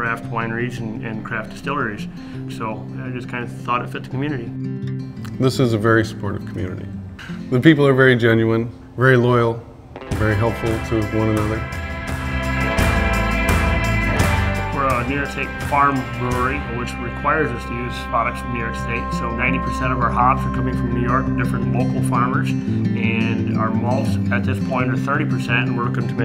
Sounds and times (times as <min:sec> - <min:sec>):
Speech: 0:00.0 - 0:04.5, 0:05.3 - 0:09.6, 0:10.2 - 0:11.6, 0:14.8 - 0:26.2
Music: 0:00.0 - 0:08.2, 0:10.0 - 0:26.2.